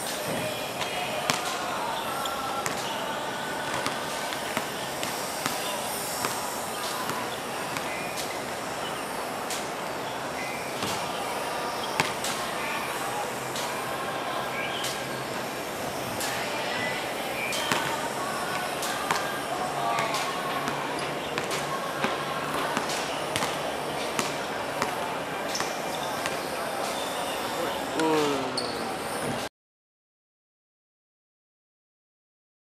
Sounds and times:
Speech: 0:00.1 - 0:08.0, 0:11.0 - 0:29.4.

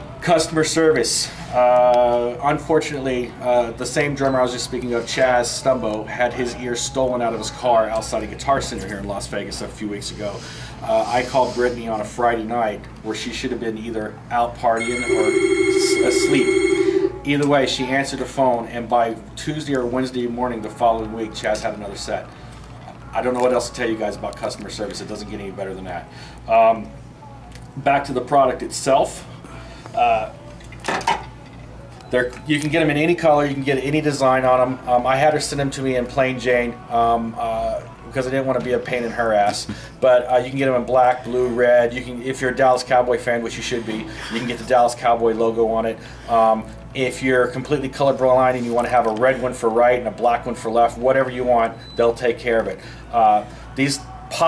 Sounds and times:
Speech: 0:00.2 - 0:15.2, 0:17.2 - 0:22.3, 0:22.9 - 0:26.9, 0:27.8 - 0:29.3, 0:30.0 - 0:30.4, 0:32.1 - 0:54.4.

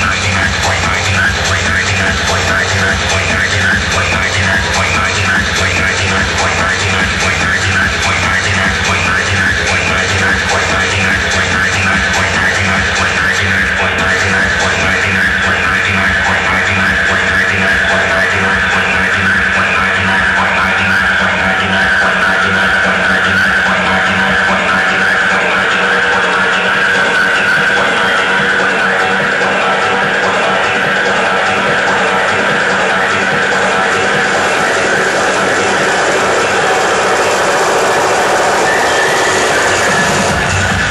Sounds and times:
Techno: 0:00.0 - 0:40.9.

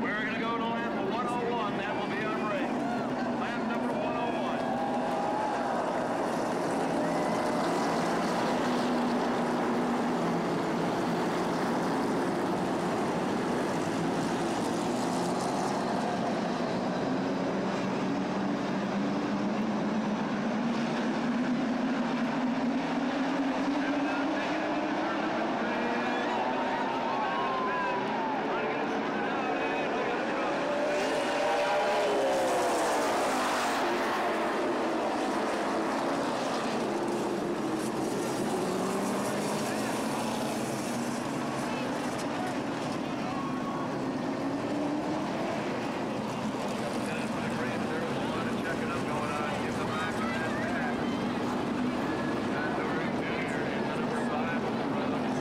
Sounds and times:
Car passing by: 0:23.5 - 0:43.8.

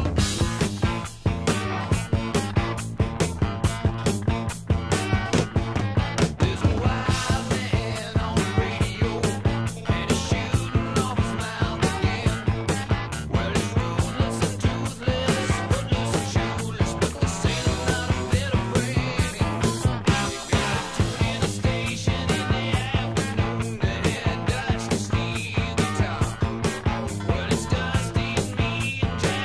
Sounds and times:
Funk: 0:00.0 - 0:29.4.

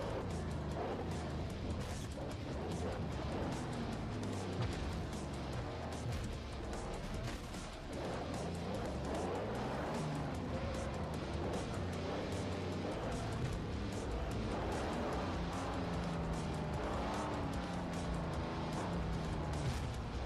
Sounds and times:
Car: 0:00.0 - 0:20.2
Music: 0:00.0 - 0:20.2.

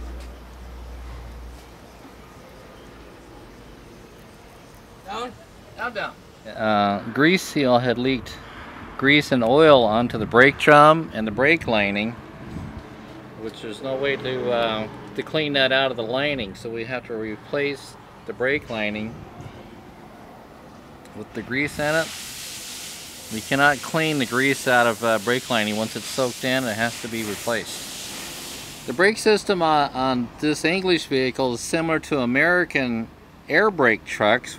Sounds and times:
Speech: 0:05.0 - 0:08.4, 0:09.0 - 0:12.2, 0:13.4 - 0:19.2, 0:21.1 - 0:22.1, 0:23.3 - 0:27.8, 0:28.9 - 0:34.5.

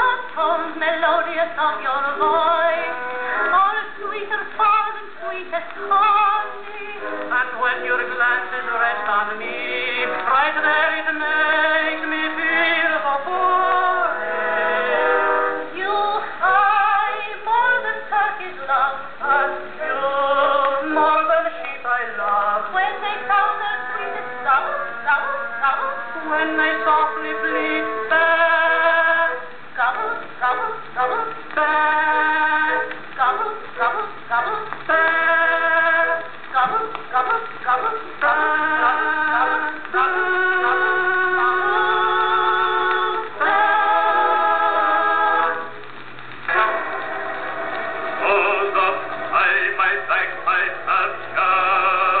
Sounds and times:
Synthetic singing: 0:00.0 - 0:14.2, 0:15.8 - 0:45.7, 0:48.2 - 0:52.2
Music: 0:00.0 - 0:52.2.

